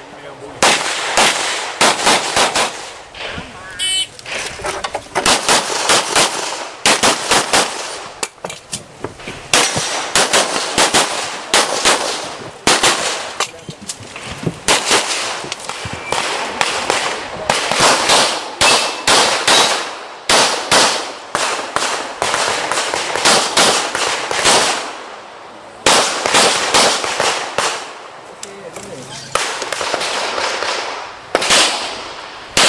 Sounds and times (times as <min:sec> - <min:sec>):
Outside, rural or natural: 0:00.0 - 0:32.6.